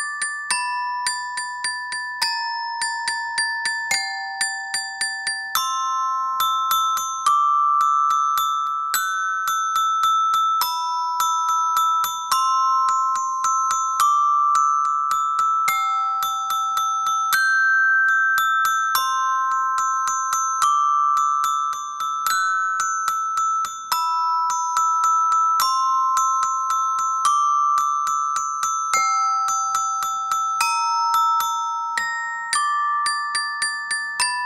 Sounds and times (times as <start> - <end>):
Glockenspiel: 0.0 - 34.4
Marimba, xylophone: 0.0 - 34.4.